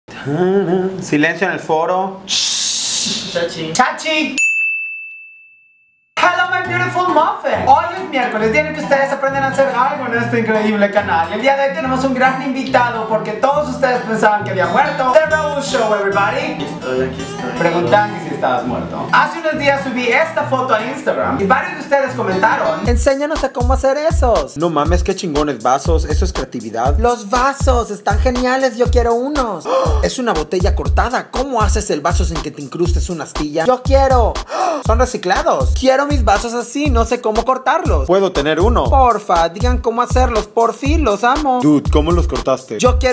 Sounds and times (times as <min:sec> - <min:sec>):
Speech: 0:00.4 - 0:04.4, 0:06.2 - 0:43.1
Music: 0:06.2 - 0:43.1.